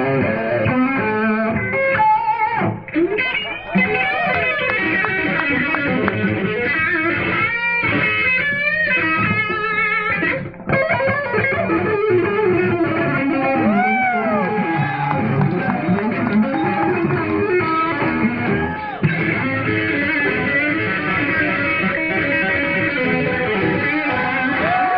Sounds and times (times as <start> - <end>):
Electric guitar: 0.0 - 24.9.